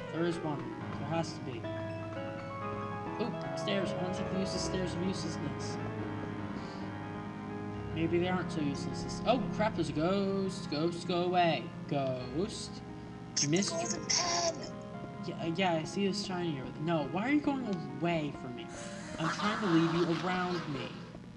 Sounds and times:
Speech: 0:00.0 - 0:01.6, 0:03.2 - 0:05.8, 0:08.0 - 0:12.8, 0:13.4 - 0:21.0
Music: 0:00.0 - 0:21.3.

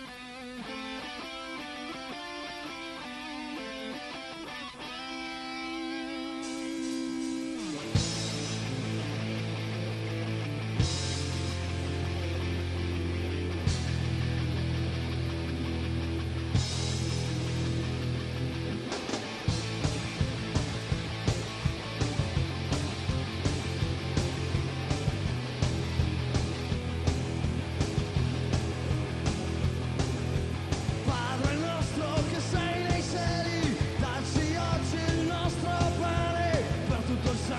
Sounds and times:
Music: 0:00.0 - 0:37.5.

